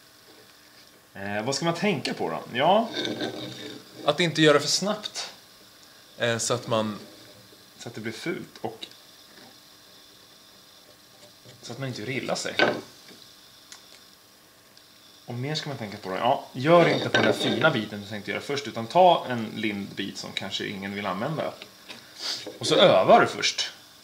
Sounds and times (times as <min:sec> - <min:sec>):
Rub: 0:02.8 - 0:04.2, 0:16.8 - 0:17.9
Wood: 0:12.6 - 0:12.9, 0:16.8 - 0:17.8.